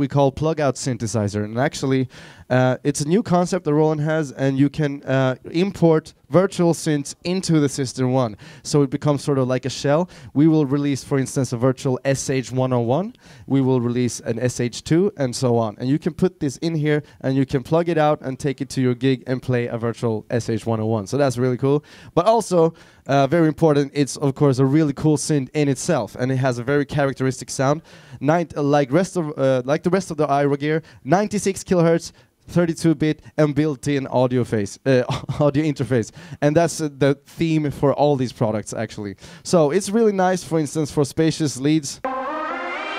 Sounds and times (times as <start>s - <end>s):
Speech: 0.0s - 42.0s.